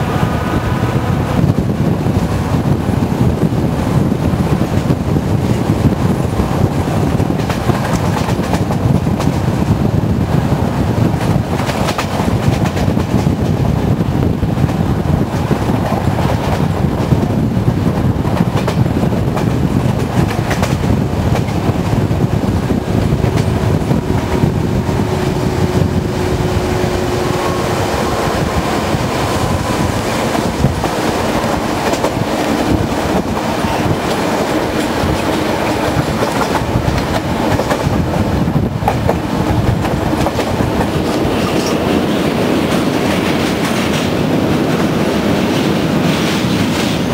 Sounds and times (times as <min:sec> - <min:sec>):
Wind noise (microphone): 0:00.0 - 0:47.1.